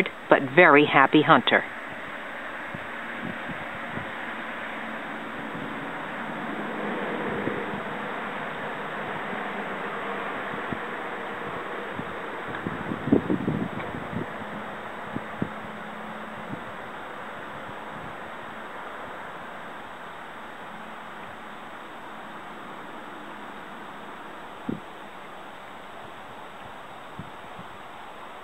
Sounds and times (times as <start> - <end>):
Rowboat, canoe, kayak: 0.0 - 28.4.